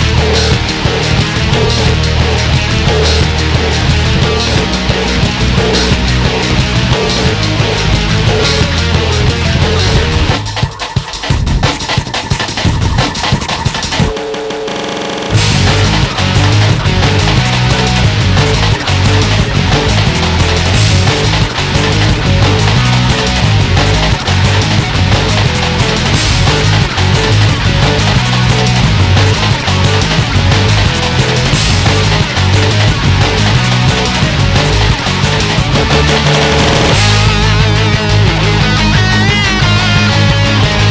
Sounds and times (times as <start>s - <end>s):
Music: 0.0s - 40.9s.